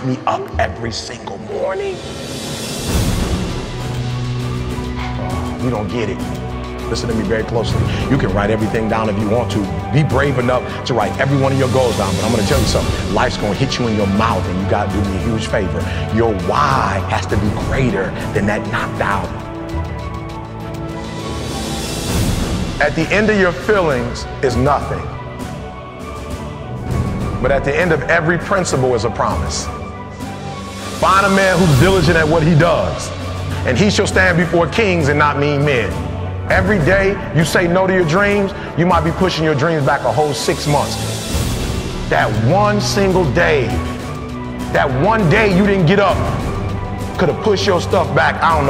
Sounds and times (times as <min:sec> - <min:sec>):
Speech: 0:00.0 - 0:02.0, 0:05.6 - 0:19.4, 0:22.8 - 0:25.1, 0:27.4 - 0:29.7, 0:31.0 - 0:41.0, 0:42.1 - 0:43.8, 0:44.7 - 0:46.4, 0:47.2 - 0:48.6
Theme music: 0:00.0 - 0:48.6.